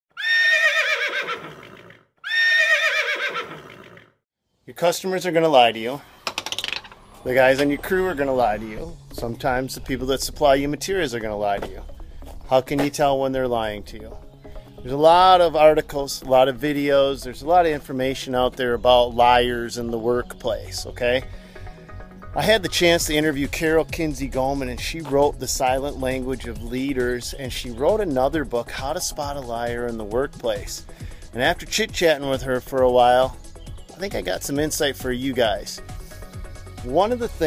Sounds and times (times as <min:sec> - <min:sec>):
Neigh, whinny: 0:00.1 - 0:04.2
Speech: 0:04.7 - 0:06.0, 0:07.2 - 0:14.2, 0:14.8 - 0:21.2, 0:22.4 - 0:30.8, 0:31.4 - 0:35.8, 0:36.8 - 0:37.4.